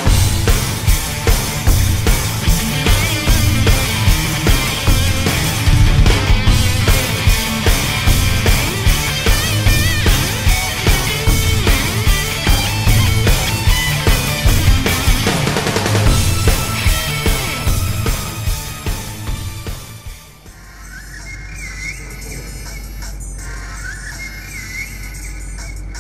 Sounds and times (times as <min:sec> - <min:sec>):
Music: 0:00.0 - 0:26.0.